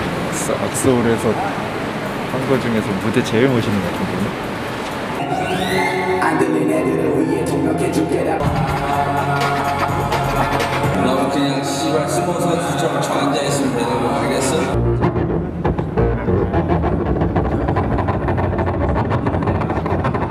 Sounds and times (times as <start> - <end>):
Music: 5.2 - 20.3
Singing: 5.5 - 14.8.